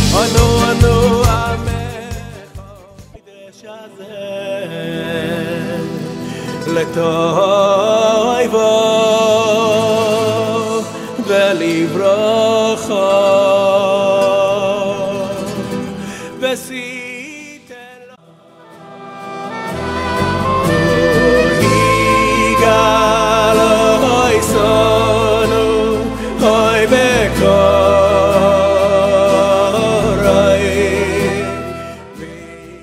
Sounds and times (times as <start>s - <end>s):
Music: 0.0s - 32.8s.